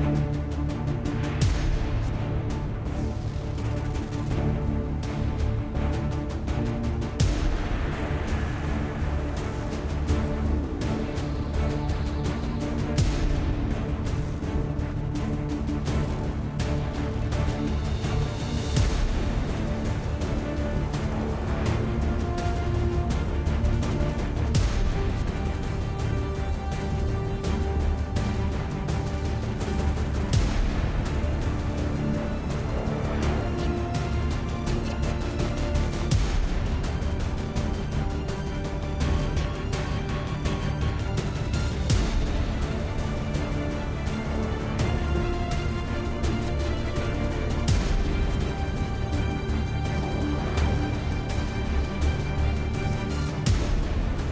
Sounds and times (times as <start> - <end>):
Soundtrack music: 0.0 - 54.3.